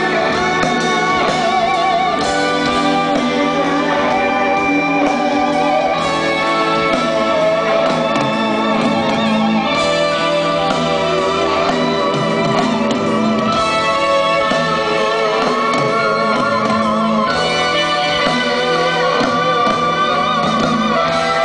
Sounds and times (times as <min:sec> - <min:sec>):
Music: 0:00.0 - 0:21.4.